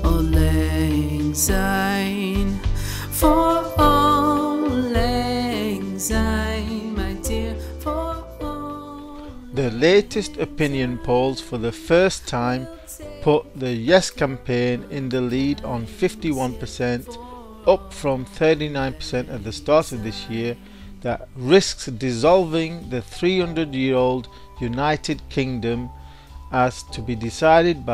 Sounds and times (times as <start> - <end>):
Music: 0.0 - 27.9
Speech: 9.6 - 25.9, 26.6 - 27.9.